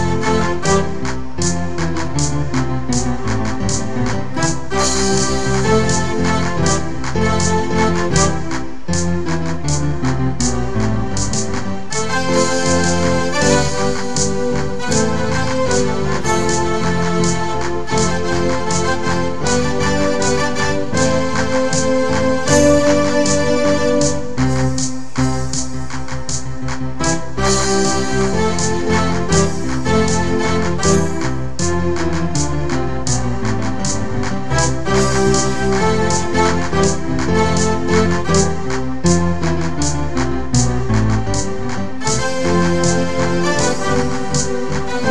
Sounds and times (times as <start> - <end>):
Music: 0.0 - 45.1.